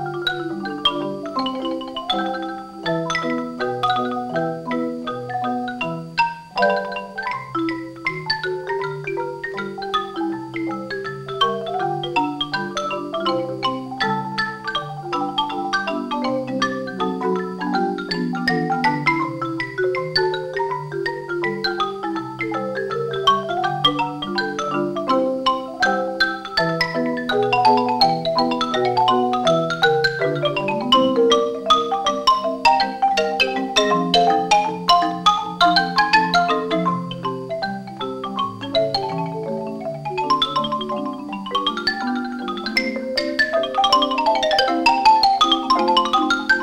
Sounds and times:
Music: 0:00.0 - 0:46.6.

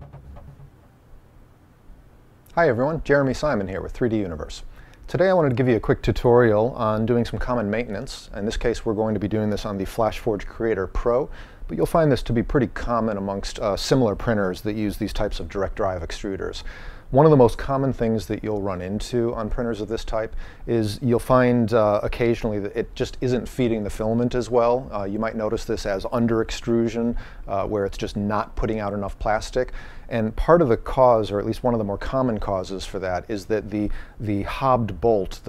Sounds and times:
Speech: 0:02.5 - 0:35.4.

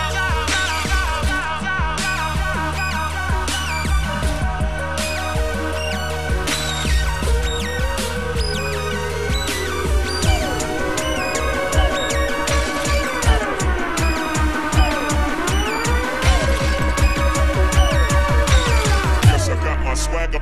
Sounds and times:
Dubstep: 0:00.0 - 0:20.4.

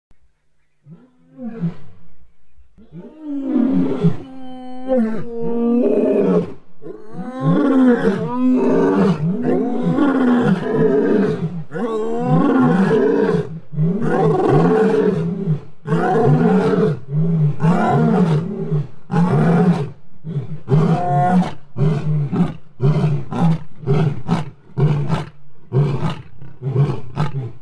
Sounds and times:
Roar: 0:00.8 - 0:02.0, 0:02.8 - 0:27.6.

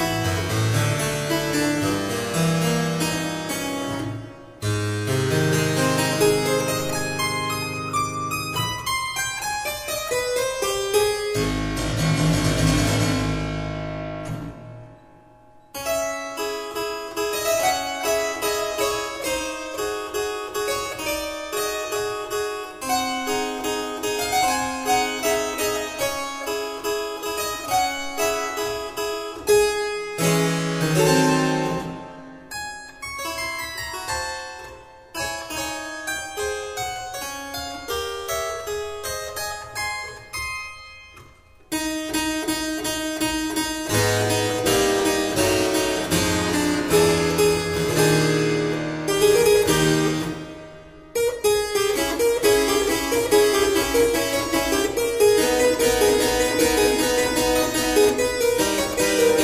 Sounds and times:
Harpsichord: 0:00.0 - 0:59.4.

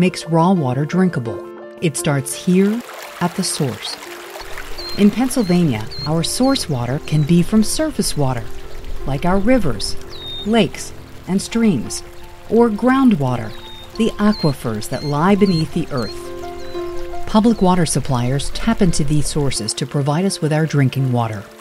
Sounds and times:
Speech: 0:00.0 - 0:04.0, 0:05.0 - 0:16.2, 0:17.3 - 0:21.5
Music: 0:00.0 - 0:21.6.

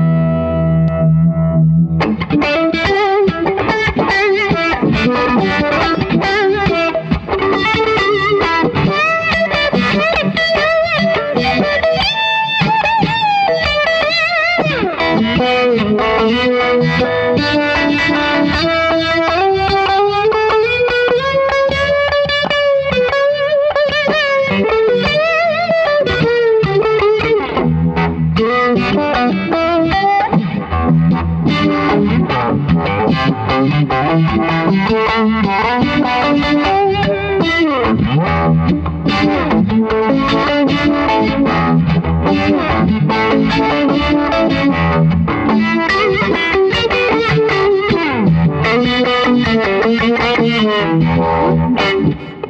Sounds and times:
Distortion: 0:00.0 - 0:52.5
Effects unit: 0:00.0 - 0:52.5
Guitar: 0:00.0 - 0:52.5.

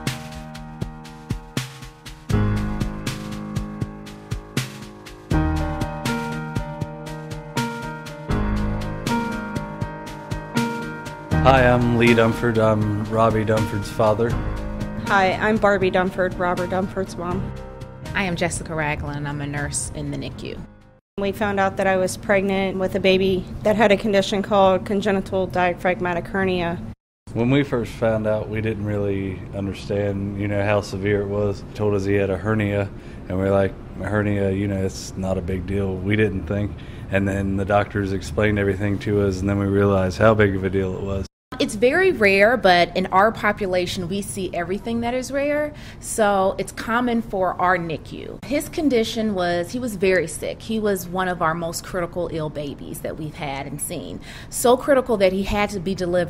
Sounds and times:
Music: 0:00.0 - 0:26.3, 0:35.3 - 0:56.3
Speech: 0:11.5 - 0:14.3, 0:27.4 - 0:45.5.

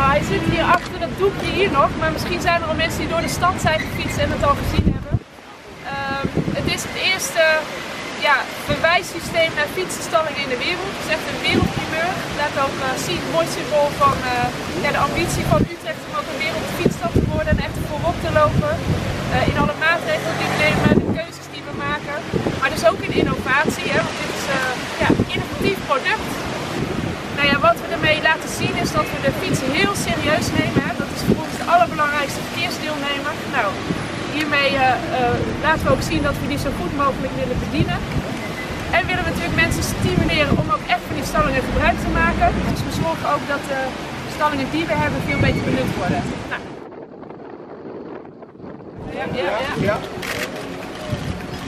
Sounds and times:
Speech: 0:00.0 - 0:05.2, 0:05.9 - 0:26.4, 0:27.4 - 0:38.0, 0:38.9 - 0:46.6.

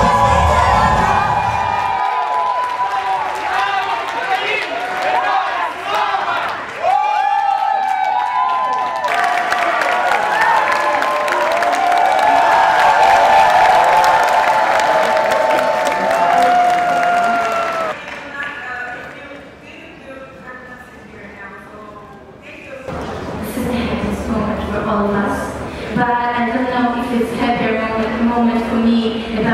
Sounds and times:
Speech: 0:18.0 - 0:29.5.

